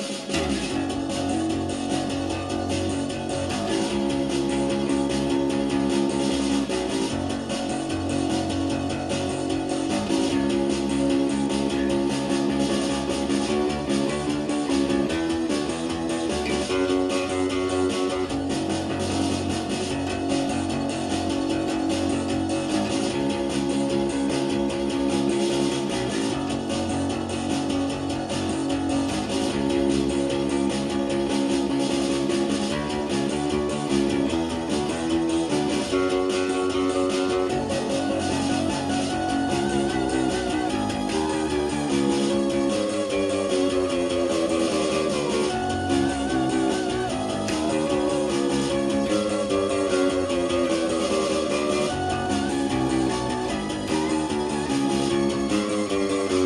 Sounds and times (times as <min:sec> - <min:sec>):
Electric guitar: 0:00.0 - 0:56.4
Strum: 0:00.0 - 0:56.4.